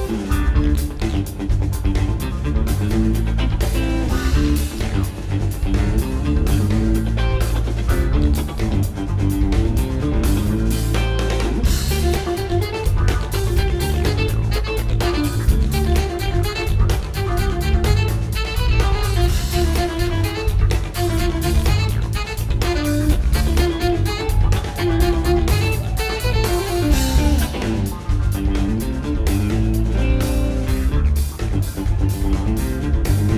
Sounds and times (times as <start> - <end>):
Exciting music: 0.0 - 33.3.